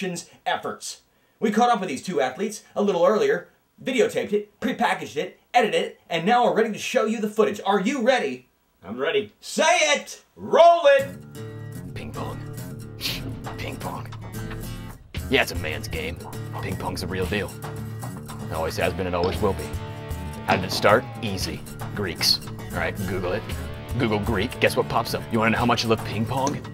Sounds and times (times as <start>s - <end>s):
Speech: 0.0s - 11.1s, 11.9s - 12.4s, 13.5s - 14.1s, 15.3s - 17.6s, 18.5s - 19.8s, 20.5s - 26.7s
Music: 10.6s - 26.7s.